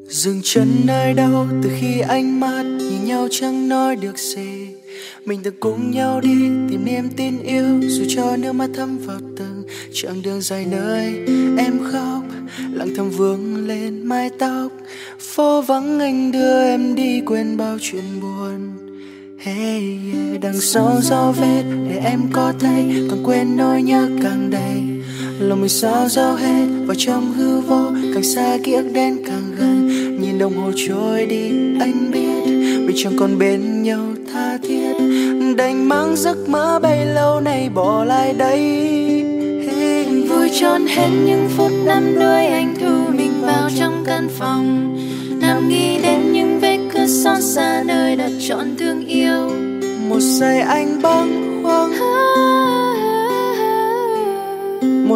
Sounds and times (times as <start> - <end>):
Music: 0.0 - 55.1.